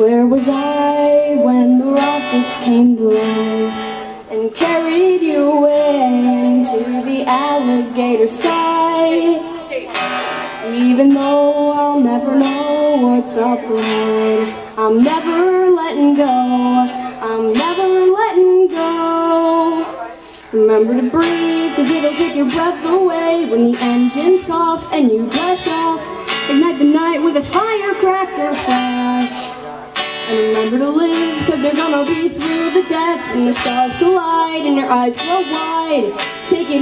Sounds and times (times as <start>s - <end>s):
Music: 0.0s - 36.8s
Speech: 6.3s - 10.0s, 10.6s - 22.0s.